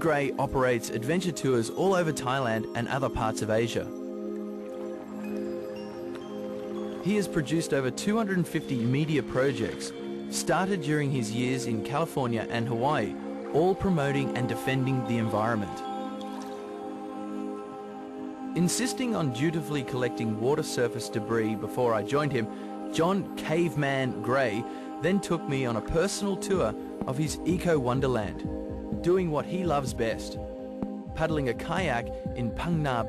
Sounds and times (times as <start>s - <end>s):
Speech: 0.0s - 3.9s, 7.0s - 15.8s, 18.6s - 28.4s, 29.0s - 30.4s, 31.2s - 33.0s
Music: 0.0s - 33.0s.